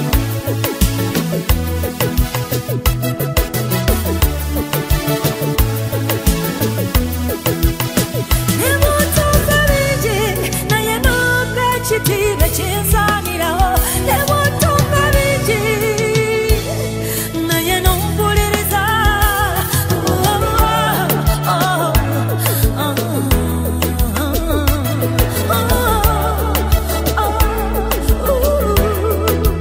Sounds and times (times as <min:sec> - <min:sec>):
Music: 0:00.0 - 0:29.6.